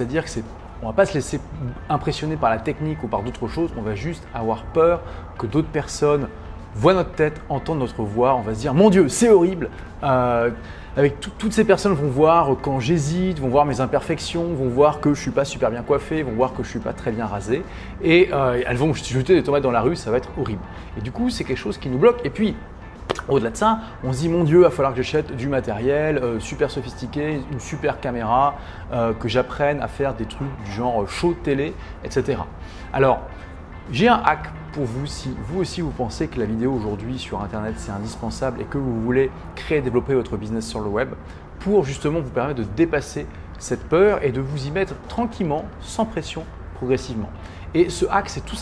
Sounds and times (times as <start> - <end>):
Speech: 0.0 - 33.3, 33.9 - 48.6
Music: 0.0 - 48.6.